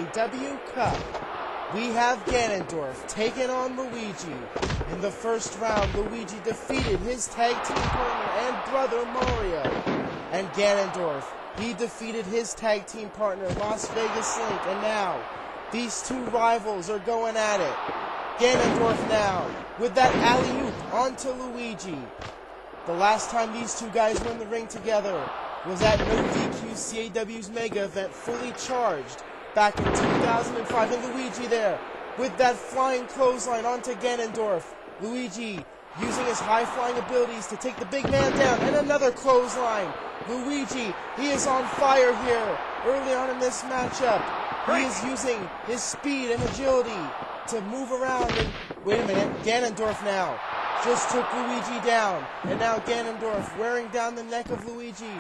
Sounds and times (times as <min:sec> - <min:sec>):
Speech: 0:00.0 - 0:01.1, 0:01.7 - 0:17.8, 0:18.4 - 0:22.1, 0:22.9 - 0:55.2.